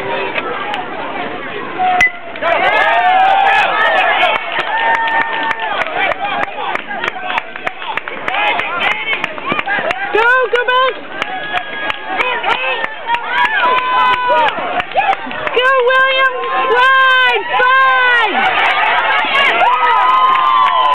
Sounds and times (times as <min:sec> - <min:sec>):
Run: 0:02.4 - 0:20.9.